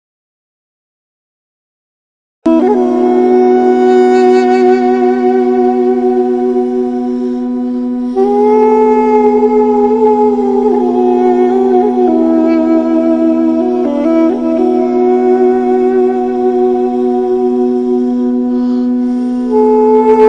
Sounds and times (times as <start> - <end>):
Music: 2.4 - 20.2
Inside, small room: 2.5 - 20.2.